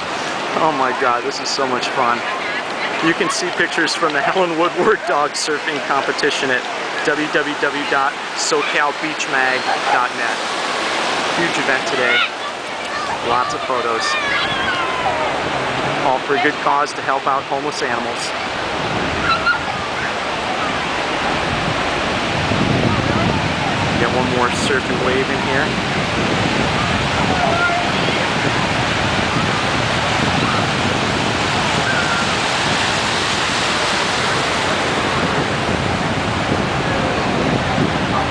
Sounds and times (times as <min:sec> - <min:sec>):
Waves, surf: 0:00.0 - 0:38.3.